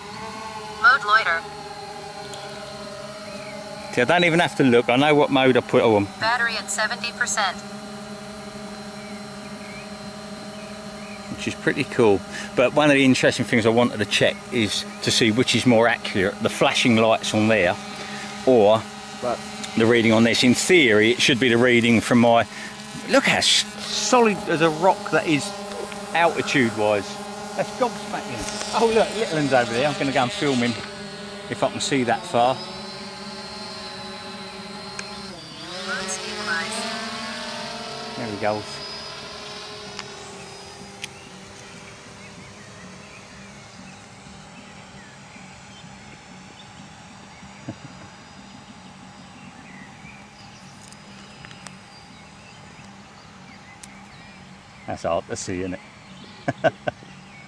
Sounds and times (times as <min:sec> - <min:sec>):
Aircraft: 0:00.0 - 0:57.4.